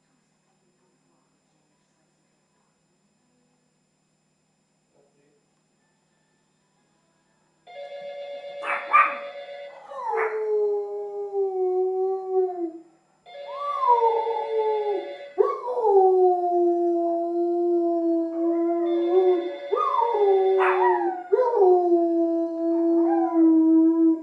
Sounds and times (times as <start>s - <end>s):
Bark: 8.6s - 10.4s, 20.6s - 21.1s
Canidae, dogs, wolves: 8.6s - 10.4s, 19.8s - 21.4s.